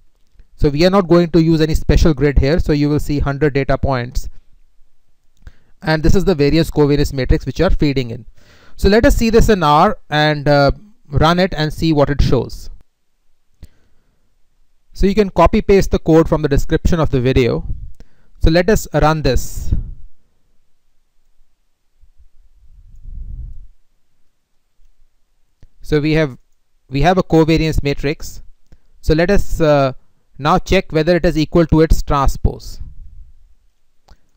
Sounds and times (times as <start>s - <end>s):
Inside, small room: 0.0s - 34.3s
Speech: 0.6s - 4.3s, 5.8s - 12.8s, 15.0s - 17.7s, 18.4s - 19.9s, 25.8s - 32.9s.